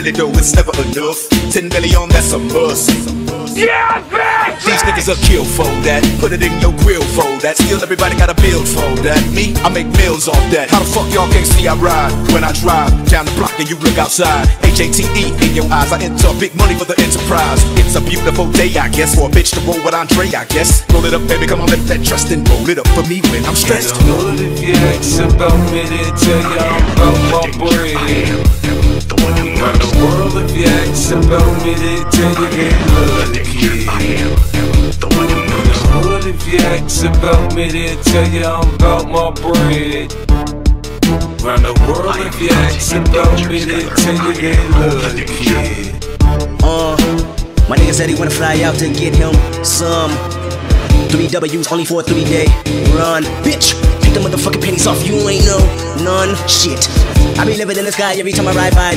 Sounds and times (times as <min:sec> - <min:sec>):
Music: 0:00.0 - 0:58.9.